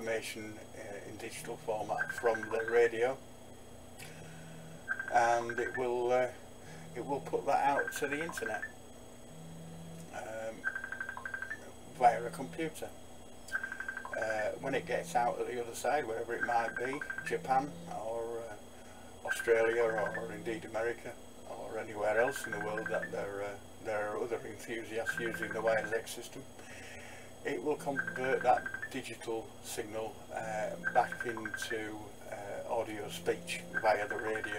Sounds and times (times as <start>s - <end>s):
Speech: 0.0s - 3.2s, 5.1s - 8.7s, 10.2s - 10.6s, 11.9s - 13.0s, 14.2s - 18.6s, 19.2s - 26.5s, 27.4s - 34.5s.